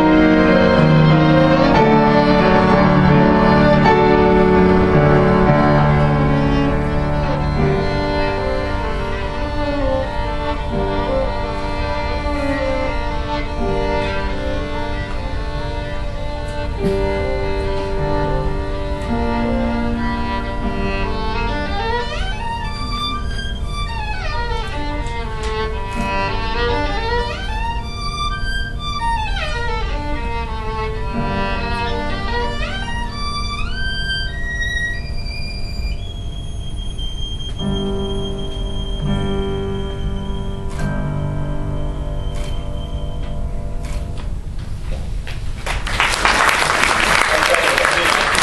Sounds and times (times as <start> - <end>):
Violin, fiddle: 0.0 - 41.0.